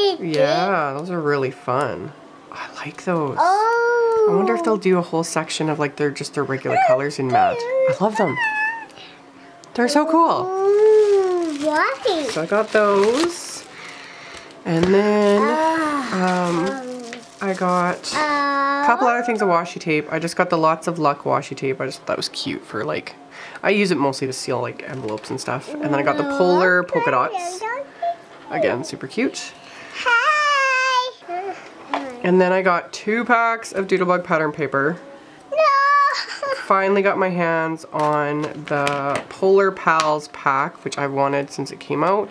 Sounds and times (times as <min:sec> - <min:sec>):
Babbling: 0:03.4 - 0:04.7, 0:06.7 - 0:09.1, 0:10.4 - 0:12.3, 0:15.4 - 0:17.3, 0:25.7 - 0:26.7, 0:30.1 - 0:32.3.